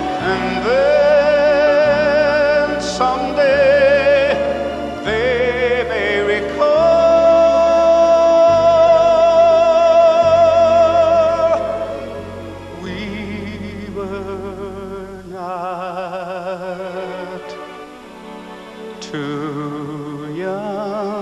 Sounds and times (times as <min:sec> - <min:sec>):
Singing: 0:00.0 - 0:17.7, 0:19.0 - 0:21.2.